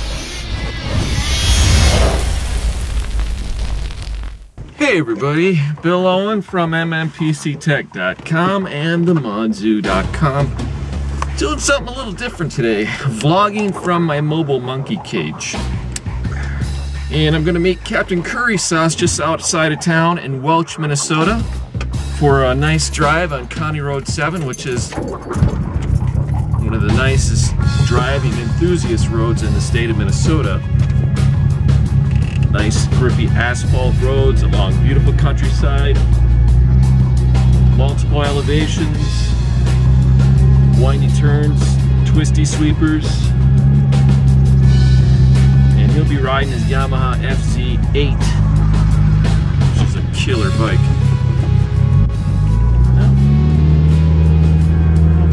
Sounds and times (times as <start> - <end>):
Speech: 4.7 - 10.6, 11.4 - 15.6, 17.1 - 21.5, 22.2 - 25.0, 26.6 - 30.6, 32.5 - 36.0, 37.8 - 39.4, 40.8 - 43.3, 45.8 - 48.4, 49.7 - 51.0
Music: 9.1 - 55.3.